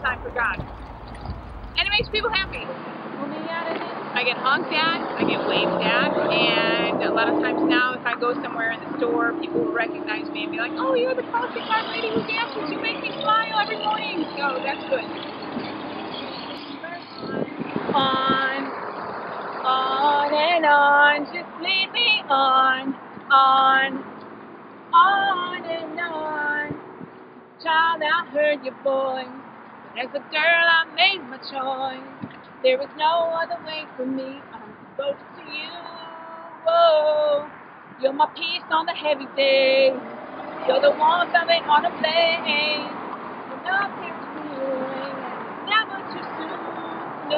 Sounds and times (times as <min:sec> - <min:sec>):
Female singing: 0:01.8 - 0:15.2, 0:16.7 - 0:18.8, 0:19.7 - 0:24.0, 0:25.0 - 0:26.8, 0:27.6 - 0:29.4, 0:30.0 - 0:40.0, 0:40.6 - 0:47.3.